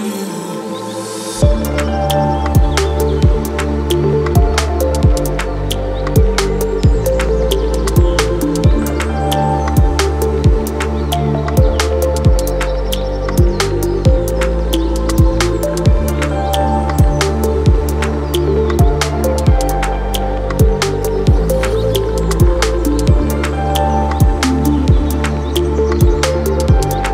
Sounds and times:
Ambient music: 0.0s - 27.1s.

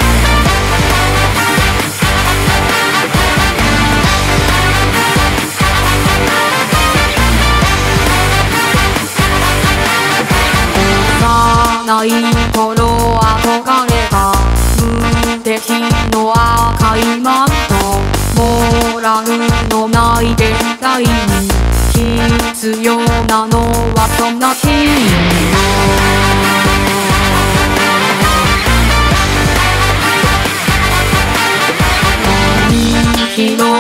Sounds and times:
Music: 0.0s - 33.8s.

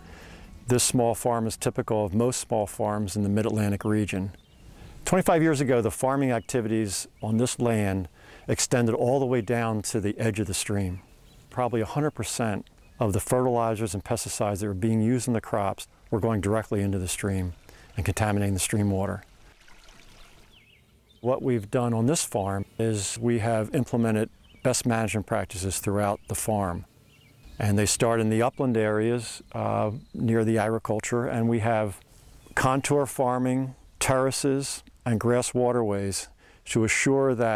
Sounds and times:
Speech: 0.7s - 4.4s, 5.0s - 19.2s, 21.2s - 26.9s, 27.6s - 32.0s, 32.6s - 37.5s
Stream: 15.2s - 21.0s.

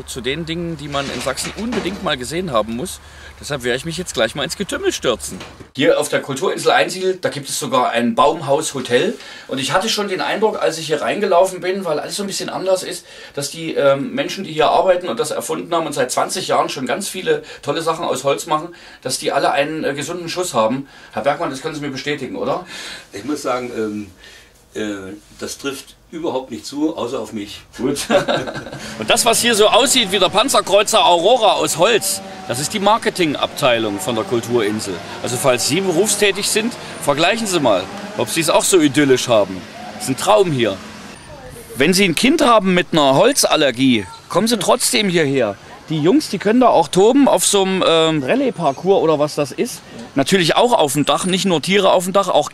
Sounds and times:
Speech: 0.0s - 24.2s, 24.8s - 28.4s, 29.0s - 52.5s.

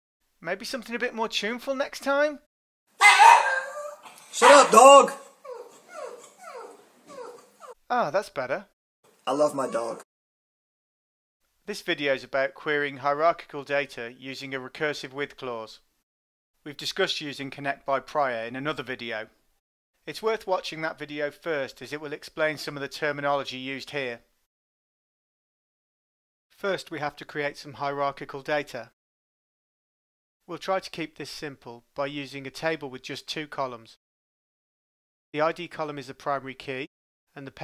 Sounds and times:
Speech: 0.4s - 2.5s, 4.4s - 5.3s, 7.9s - 8.7s, 9.3s - 10.1s, 11.7s - 15.9s, 16.7s - 19.4s, 20.1s - 24.3s, 26.6s - 29.0s, 30.5s - 34.0s, 35.4s - 37.6s.

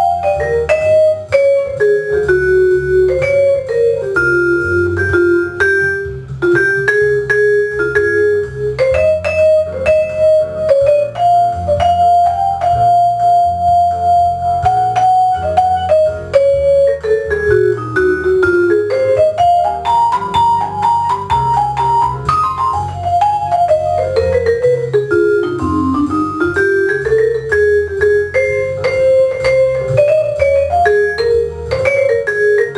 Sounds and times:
Vibraphone: 0.0s - 32.7s.

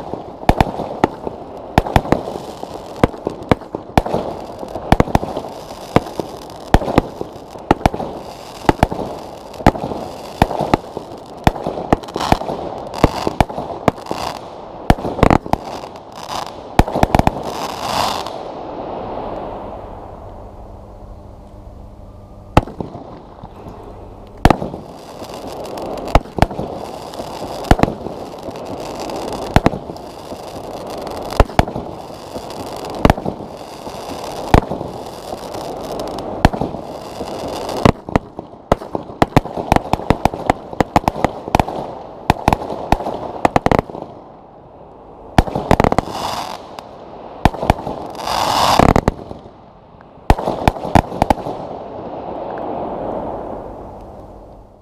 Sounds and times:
Firecracker: 0.0s - 54.8s.

